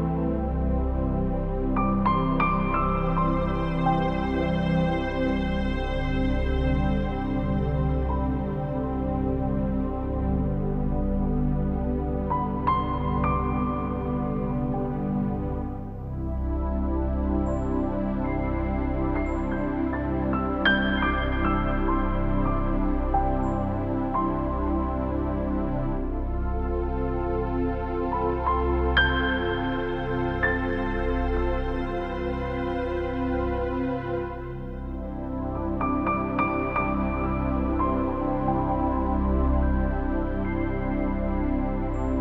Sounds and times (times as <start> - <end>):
New-age music: 0.0 - 42.2.